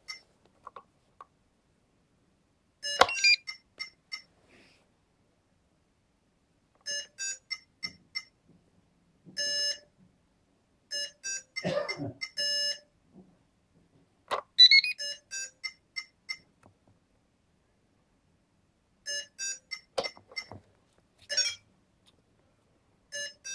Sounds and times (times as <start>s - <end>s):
Alarm: 2.8s - 4.3s, 6.9s - 8.3s, 9.4s - 9.9s, 10.9s - 12.9s, 14.6s - 16.4s, 19.1s - 20.5s, 23.1s - 23.5s.